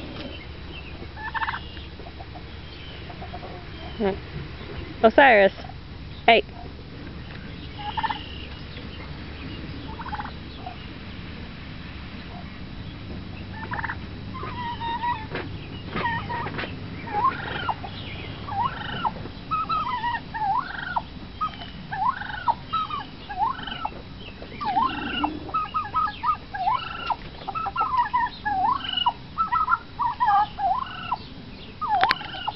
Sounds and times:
Gobble: 0:01.2 - 0:04.2, 0:07.7 - 0:08.6, 0:09.9 - 0:10.8, 0:13.4 - 0:17.9, 0:18.5 - 0:24.0, 0:24.6 - 0:31.2, 0:31.8 - 0:32.5.

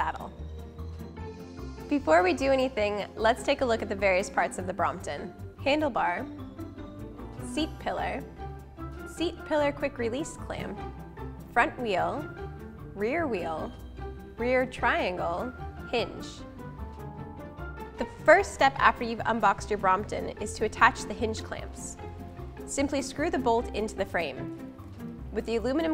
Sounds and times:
Music: 0:00.0 - 0:25.9
Speech: 0:01.9 - 0:06.3, 0:07.5 - 0:08.2, 0:09.2 - 0:10.8, 0:11.6 - 0:12.2, 0:13.0 - 0:13.7, 0:14.4 - 0:16.4, 0:18.0 - 0:22.0, 0:22.7 - 0:24.4, 0:25.4 - 0:25.9.

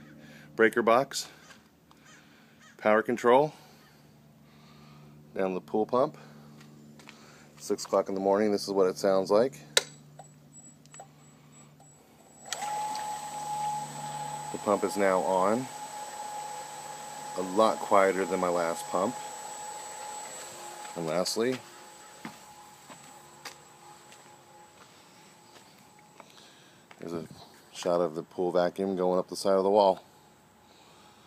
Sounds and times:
Speech: 0:00.6 - 0:01.4, 0:02.8 - 0:03.6, 0:05.4 - 0:06.3, 0:07.6 - 0:09.8, 0:14.5 - 0:15.7, 0:17.4 - 0:19.2, 0:21.0 - 0:21.7, 0:27.0 - 0:30.1.

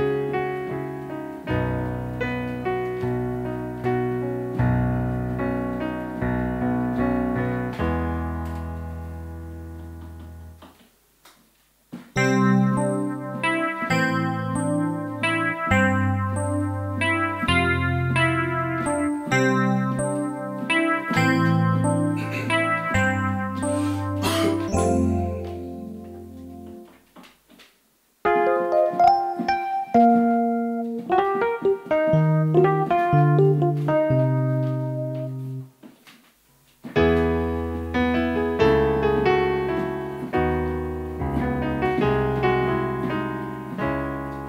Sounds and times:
Piano: 0:00.0 - 0:11.2, 0:11.8 - 0:44.4.

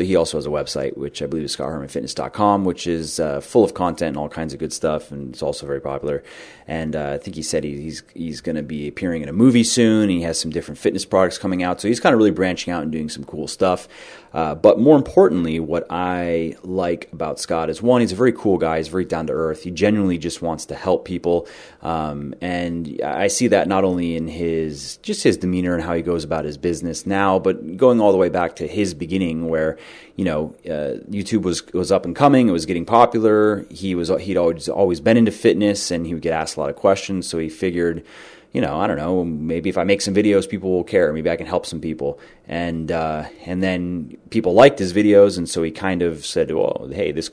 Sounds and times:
Speech: 0:00.0 - 0:47.3.

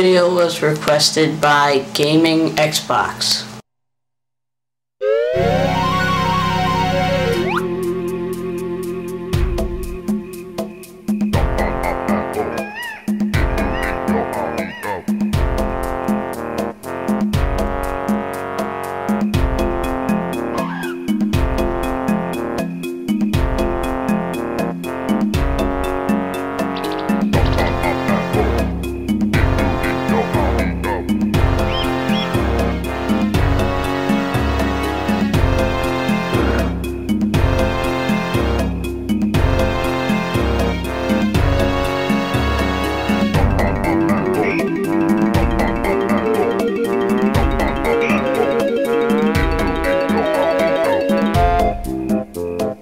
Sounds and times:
Music: 0:05.3 - 0:52.8.

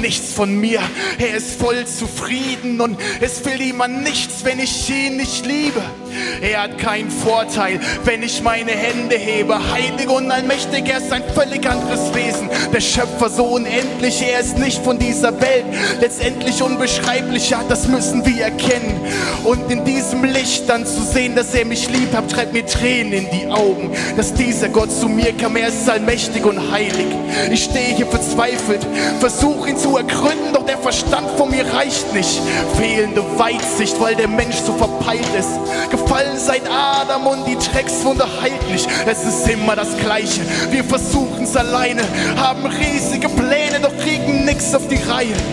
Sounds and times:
Music: 0:00.0 - 0:45.5.

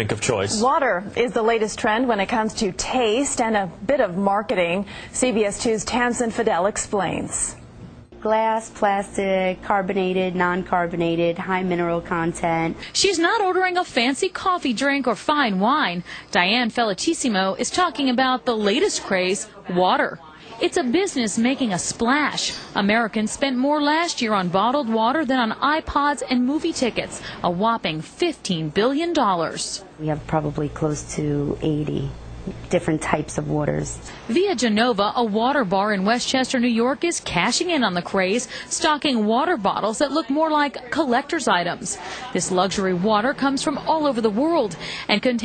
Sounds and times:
Speech: 0:08.2 - 0:45.4.

